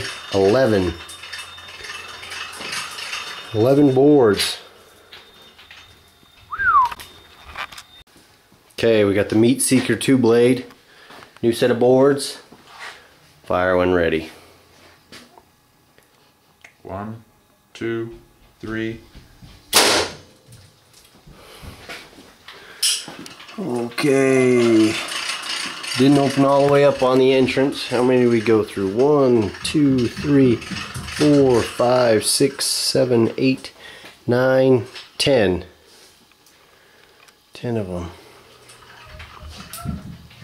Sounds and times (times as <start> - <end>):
Speech: 0.0 - 1.0, 8.8 - 10.7, 11.4 - 12.5, 13.5 - 14.3, 16.8 - 19.1, 23.6 - 25.1, 26.0 - 35.8, 37.6 - 38.2.